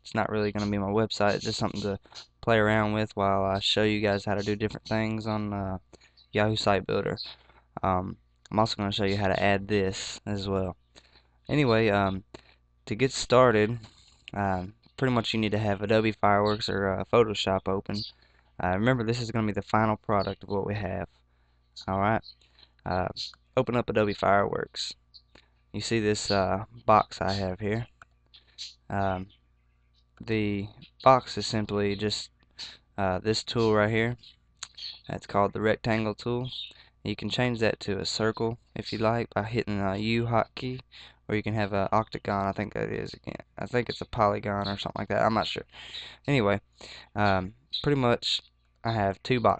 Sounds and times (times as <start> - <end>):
Speech: 0.0 - 10.8, 11.5 - 21.1, 21.8 - 25.0, 25.8 - 28.0, 28.9 - 29.3, 30.2 - 49.6.